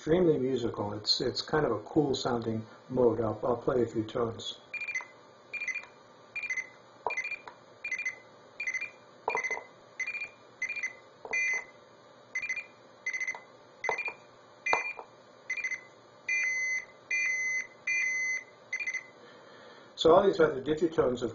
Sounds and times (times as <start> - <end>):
Speech: 0.0 - 4.7, 20.0 - 21.3
Beep, bleep: 4.8 - 11.7, 12.4 - 15.0, 16.4 - 19.1.